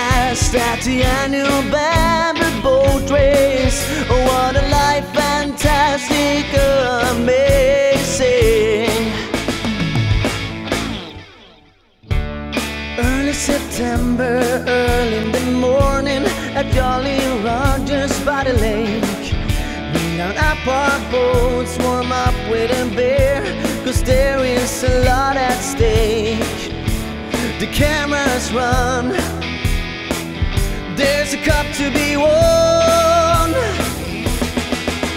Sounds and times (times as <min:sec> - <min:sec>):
Rhythm and blues: 0:00.0 - 0:35.1.